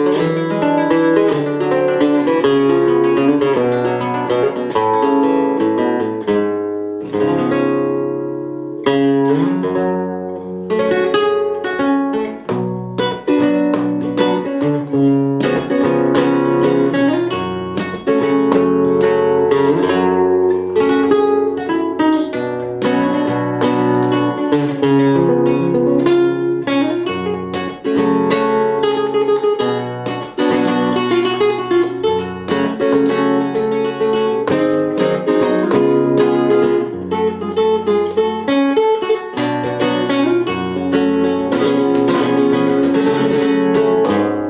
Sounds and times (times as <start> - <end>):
Guitar: 0.0 - 44.4.